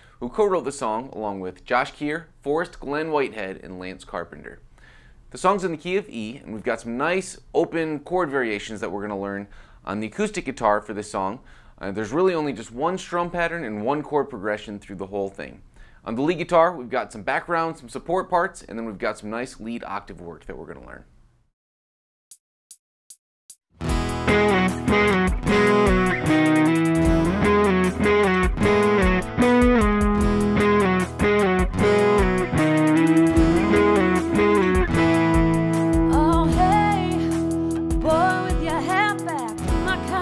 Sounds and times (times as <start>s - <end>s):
Electric guitar: 23.8s - 40.2s
Strum: 23.8s - 40.2s.